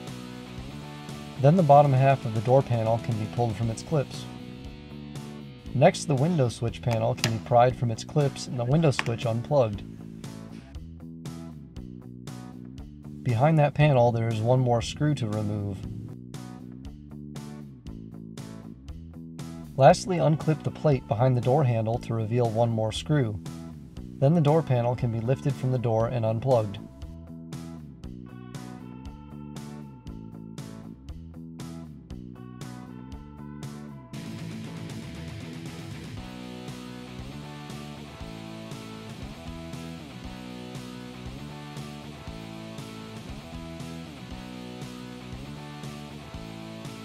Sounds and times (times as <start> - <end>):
Music: 0.0 - 47.0
Speech: 1.4 - 4.4, 5.8 - 9.8, 13.2 - 16.0, 19.8 - 23.4, 24.2 - 26.9.